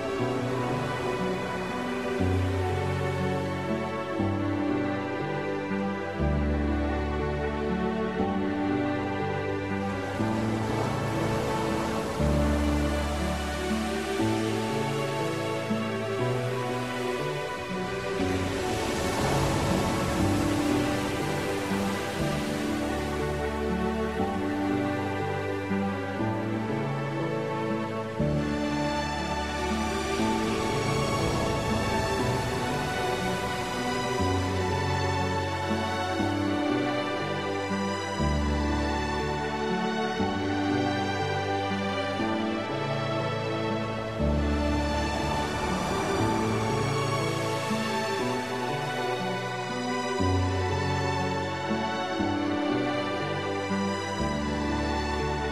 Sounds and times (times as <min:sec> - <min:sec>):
Music: 0:00.0 - 0:55.5
Ocean: 0:00.0 - 0:55.5.